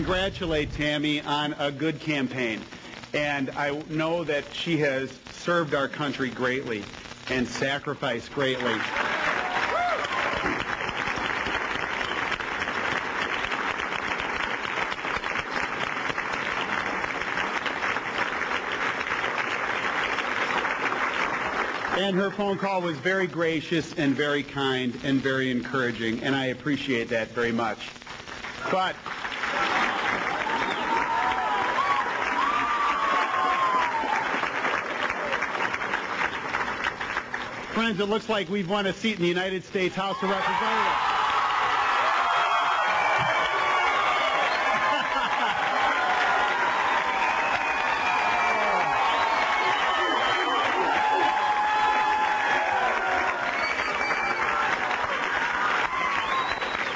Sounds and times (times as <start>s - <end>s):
Male speech, man speaking: 0.0s - 2.6s, 3.2s - 8.8s, 22.0s - 27.9s, 28.7s - 29.0s, 37.8s - 40.9s.